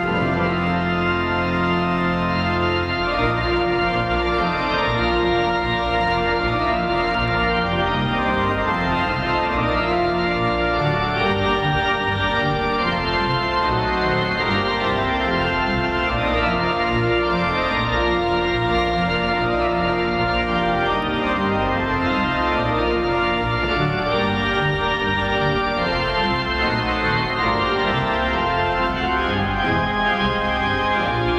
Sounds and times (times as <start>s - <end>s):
Classical music: 0.0s - 31.3s.